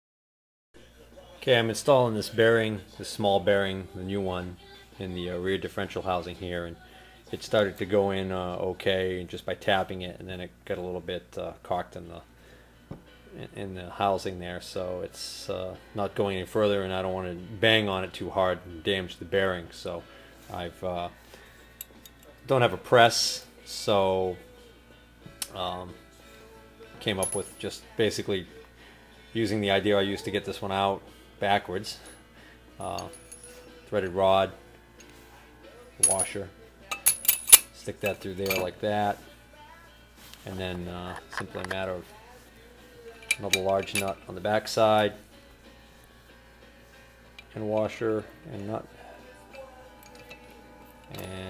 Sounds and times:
Speech: 0.8s - 12.3s, 13.4s - 21.2s, 22.5s - 24.4s, 25.5s - 26.0s, 27.0s - 28.6s, 29.4s - 32.1s, 32.8s - 33.2s, 33.9s - 34.6s, 36.0s - 36.6s, 37.8s - 39.3s, 40.4s - 42.2s, 43.3s - 45.2s, 47.6s - 49.0s, 51.1s - 51.5s.

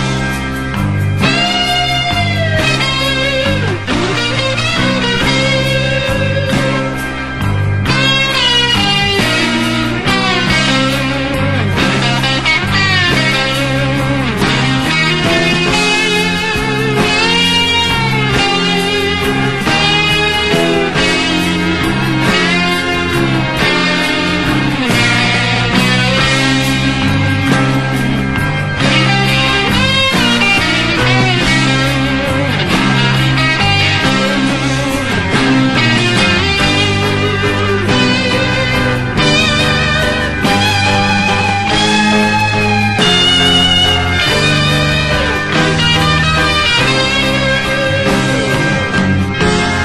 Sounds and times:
Punk rock: 0.0s - 49.8s.

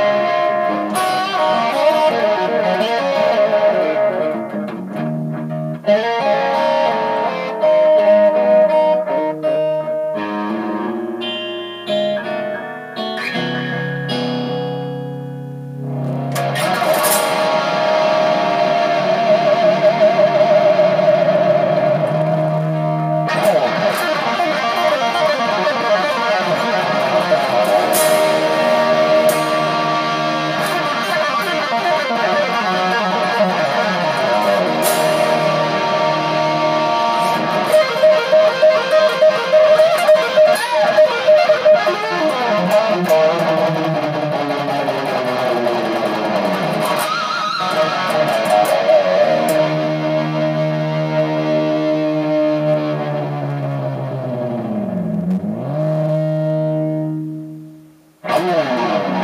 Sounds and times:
Rock music: 0.0s - 57.4s, 58.2s - 59.2s
Guitar: 0.0s - 59.2s.

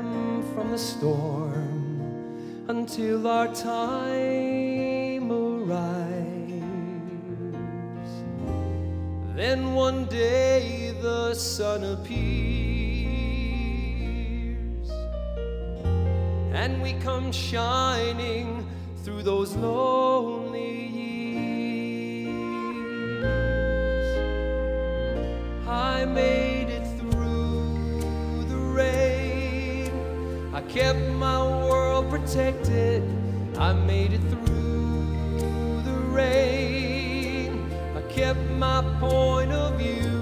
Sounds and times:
Music: 0.0s - 40.2s.

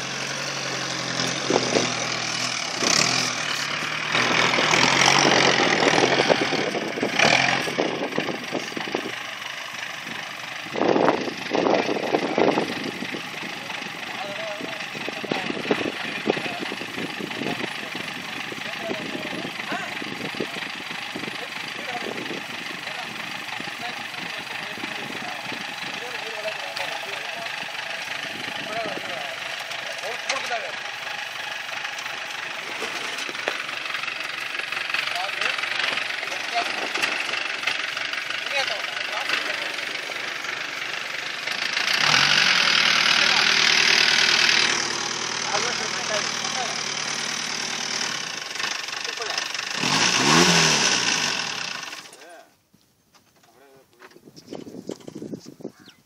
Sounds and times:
Outside, rural or natural: 0.0s - 56.0s
Vehicle: 0.0s - 56.0s.

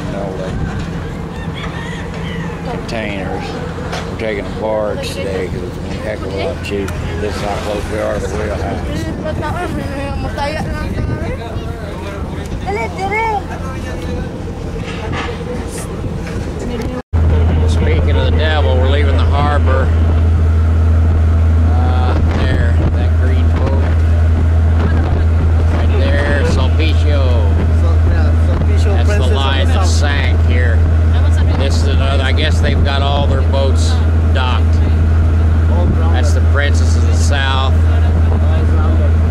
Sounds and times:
Vehicle: 0.0s - 39.3s.

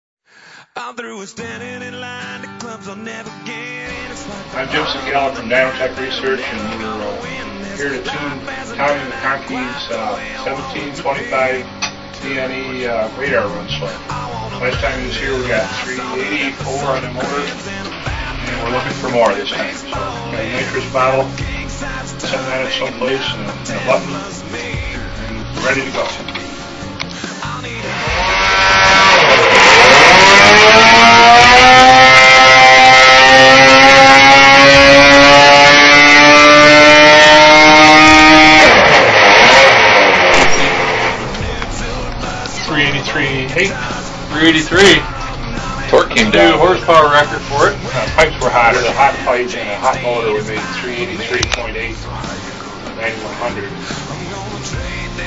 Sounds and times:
Music: 0.4s - 55.2s
Speech: 4.6s - 11.6s, 12.2s - 17.7s, 18.5s - 21.3s, 25.4s - 26.2s, 42.5s - 45.1s, 45.8s - 52.3s, 53.0s - 53.8s.

